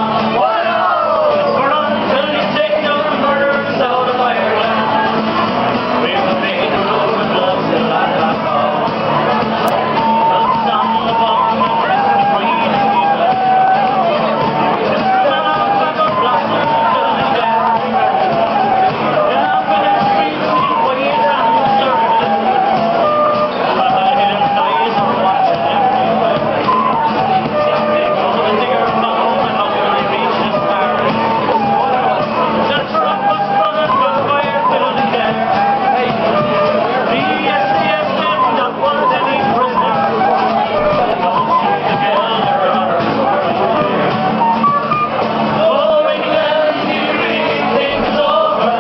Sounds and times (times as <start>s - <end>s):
Male singing: 0.0s - 5.2s, 6.0s - 44.3s, 45.5s - 48.8s
Speech: 0.0s - 44.4s, 45.1s - 48.8s
Music: 0.0s - 48.8s.